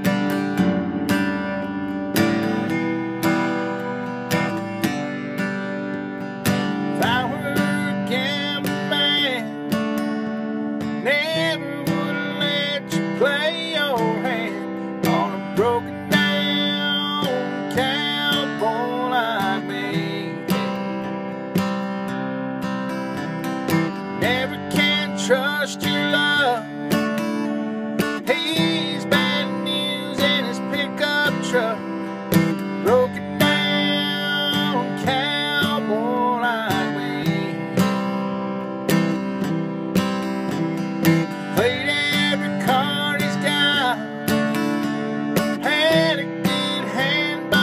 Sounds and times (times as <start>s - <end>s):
Music: 0.0s - 47.6s.